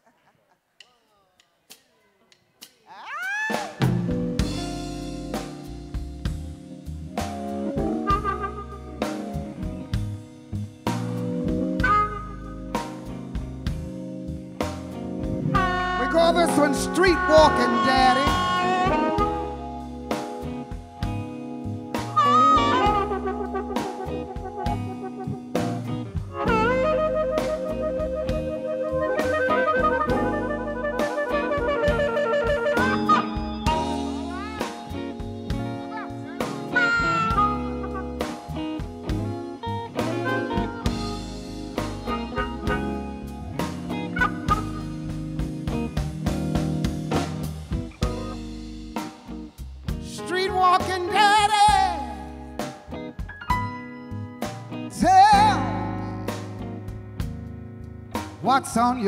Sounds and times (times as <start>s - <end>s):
Electric guitar: 3.5s - 59.0s.